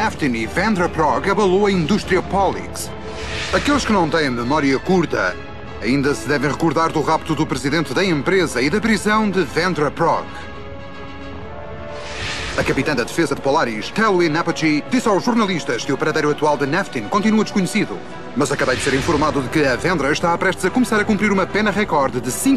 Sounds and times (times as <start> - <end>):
Speech: 0.0 - 2.9, 3.5 - 10.4, 12.6 - 22.5
Music: 0.0 - 22.5.